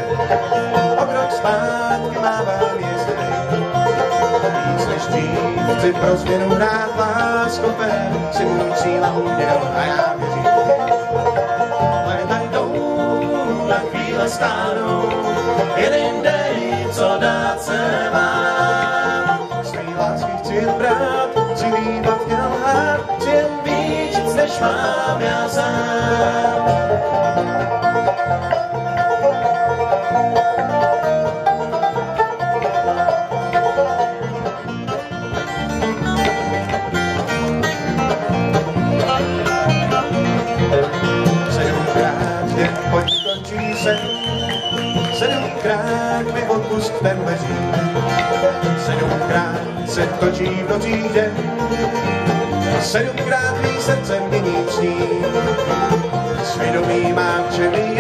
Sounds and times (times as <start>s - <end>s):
Country: 0.0s - 58.0s.